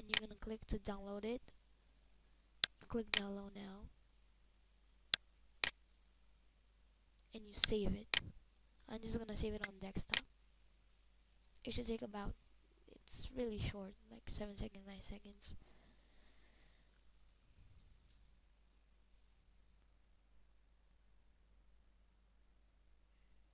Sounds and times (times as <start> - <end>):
Speech: 0.0 - 1.5, 2.8 - 3.9, 7.3 - 10.2, 11.6 - 15.6.